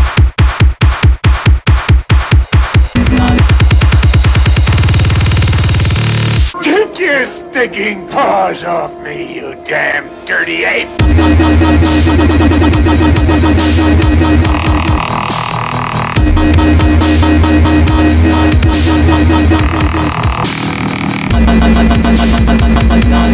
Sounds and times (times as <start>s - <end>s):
Dubstep: 0.0s - 6.7s, 11.0s - 23.3s.